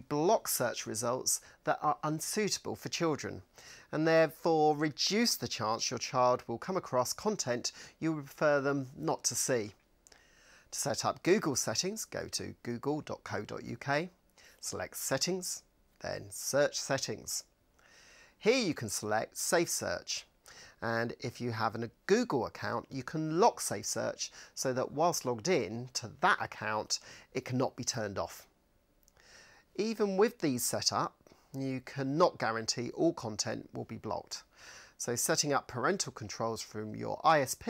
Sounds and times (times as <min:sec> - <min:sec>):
Speech: 0:00.0 - 0:09.8, 0:10.7 - 0:17.5, 0:18.4 - 0:28.5, 0:29.8 - 0:37.6.